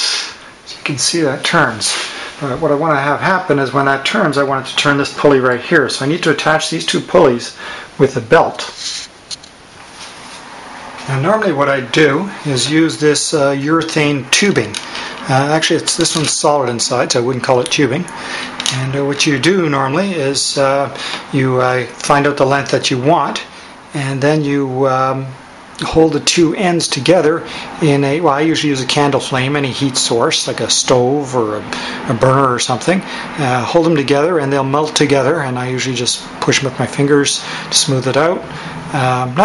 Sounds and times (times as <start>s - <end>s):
Speech: 0.0s - 9.1s, 11.1s - 39.4s.